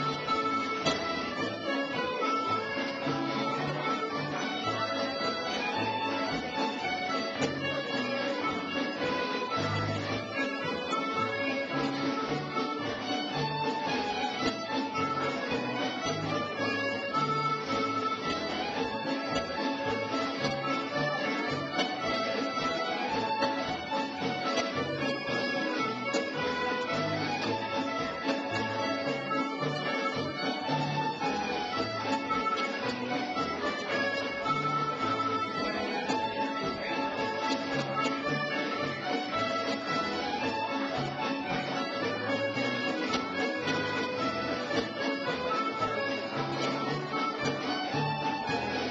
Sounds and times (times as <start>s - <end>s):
Violin, fiddle: 0.0s - 48.9s.